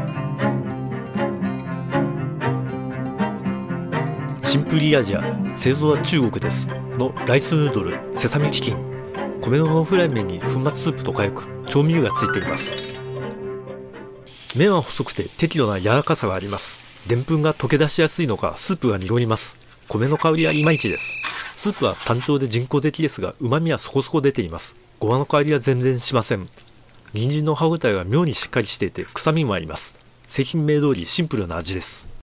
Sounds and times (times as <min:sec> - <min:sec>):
Speech: 0:04.4 - 0:08.8, 0:09.4 - 0:12.7, 0:14.6 - 0:26.5, 0:27.1 - 0:32.2.